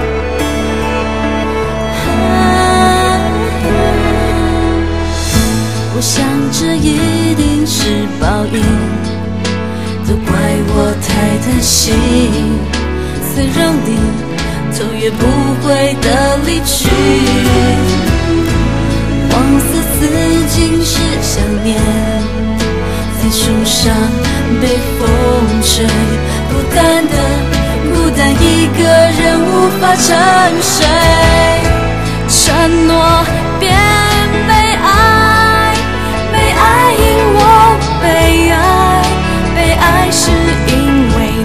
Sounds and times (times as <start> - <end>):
Music: 0.0 - 41.4.